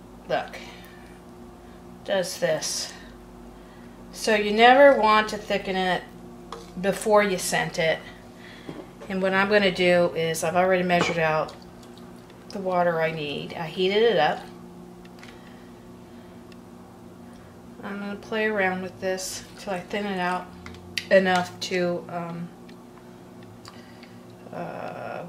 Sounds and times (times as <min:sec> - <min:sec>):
Speech: 0:02.1 - 0:03.0, 0:04.2 - 0:06.1, 0:06.8 - 0:08.1, 0:09.1 - 0:11.6, 0:12.6 - 0:14.5, 0:17.8 - 0:20.4, 0:21.1 - 0:22.5, 0:24.5 - 0:25.2.